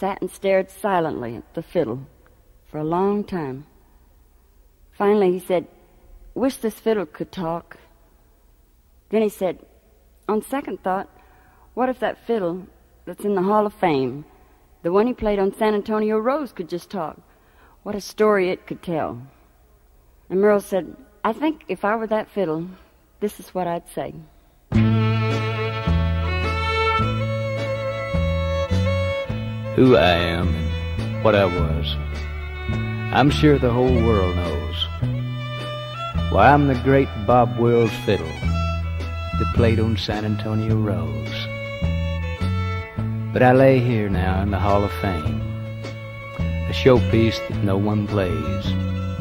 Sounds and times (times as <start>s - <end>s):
Speech: 0.0s - 2.1s, 2.7s - 3.7s, 5.0s - 5.8s, 6.4s - 7.9s, 9.1s - 9.7s, 10.3s - 11.1s, 11.8s - 17.2s, 17.9s - 19.3s, 20.3s - 24.3s, 29.8s - 32.0s, 33.1s - 34.9s, 36.3s - 38.5s, 39.4s - 41.5s, 43.4s - 45.4s, 46.7s - 48.8s.